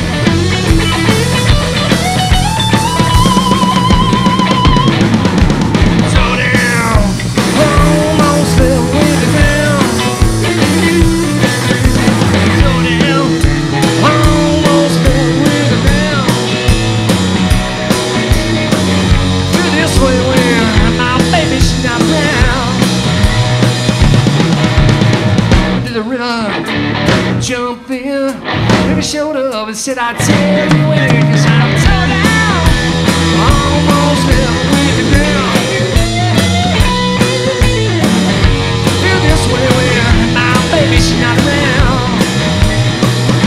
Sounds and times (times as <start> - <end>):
Music: 0.0 - 43.4.